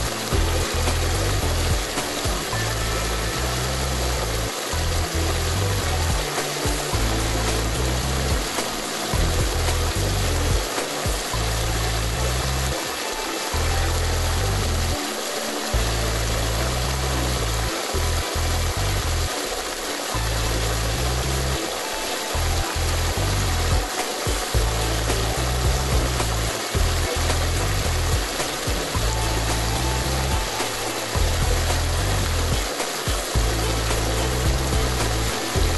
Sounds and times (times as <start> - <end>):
Music: 0.0 - 35.7
Spray: 0.0 - 35.7.